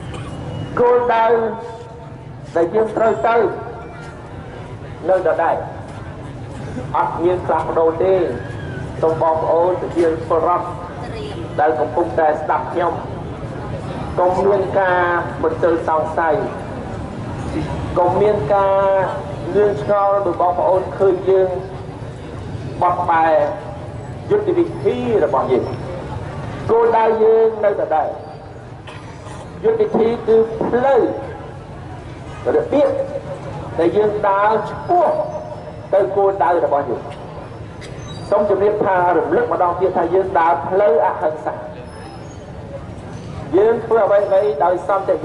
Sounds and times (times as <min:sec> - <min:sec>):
Narration, monologue: 0:00.1 - 0:31.8, 0:32.4 - 0:41.9, 0:43.4 - 0:45.2
Male speech, man speaking: 0:00.8 - 0:03.8, 0:05.0 - 0:05.8, 0:06.9 - 0:08.4, 0:09.0 - 0:10.9, 0:11.6 - 0:13.1, 0:14.2 - 0:16.6, 0:17.6 - 0:21.7, 0:22.8 - 0:25.8, 0:26.7 - 0:28.2, 0:29.6 - 0:31.3, 0:32.4 - 0:33.2, 0:33.8 - 0:37.1, 0:38.3 - 0:41.8, 0:43.5 - 0:45.2.